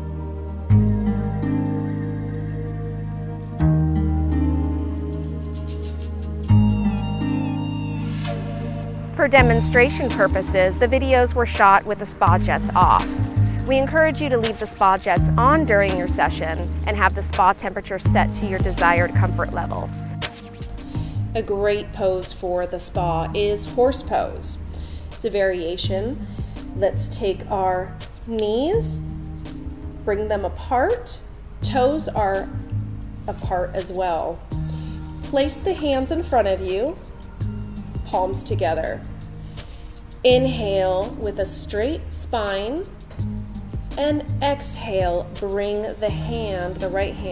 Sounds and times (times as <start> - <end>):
Music: 0.0 - 47.3
Speech: 9.2 - 13.1, 13.7 - 19.9, 21.4 - 24.5, 26.8 - 29.0, 44.0 - 47.3.